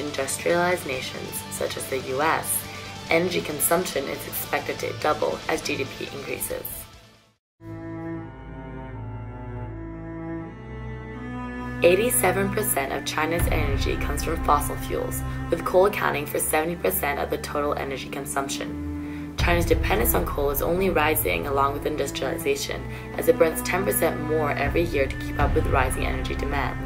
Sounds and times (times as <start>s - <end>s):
Speech: 0.0s - 6.9s, 11.8s - 18.8s, 19.4s - 26.8s
Music: 0.0s - 26.8s.